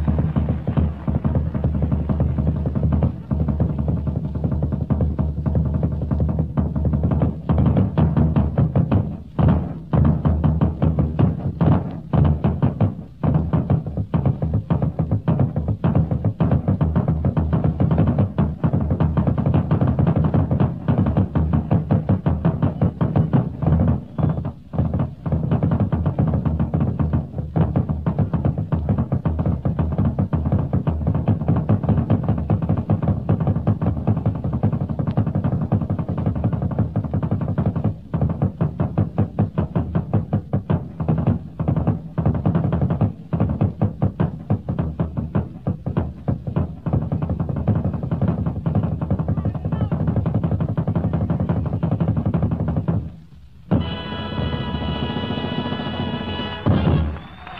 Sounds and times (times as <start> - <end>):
Bass drum: 0.0 - 57.5.